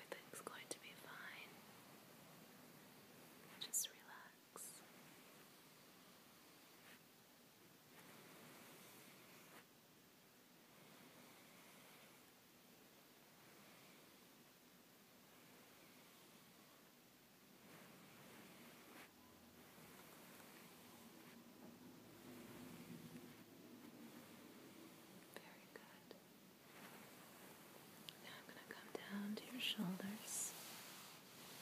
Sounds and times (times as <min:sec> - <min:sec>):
Whispering: 0:00.0 - 0:01.6, 0:03.5 - 0:05.0, 0:25.2 - 0:26.3, 0:28.1 - 0:30.7.